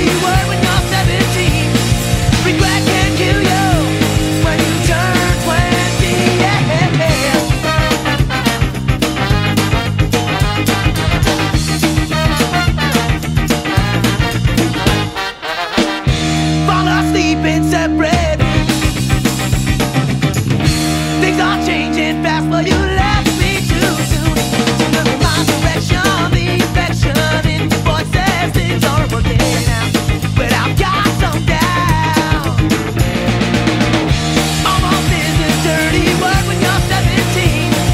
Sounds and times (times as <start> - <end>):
Psychedelic rock: 0.0 - 37.9.